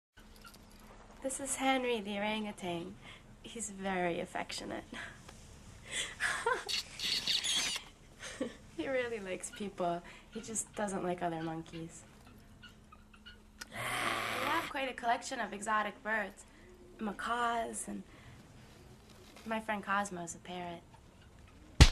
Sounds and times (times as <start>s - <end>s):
Speech: 1.2s - 5.0s, 8.8s - 12.0s, 14.5s - 16.4s, 17.0s - 18.1s, 19.5s - 20.8s
Animal: 6.7s - 7.8s.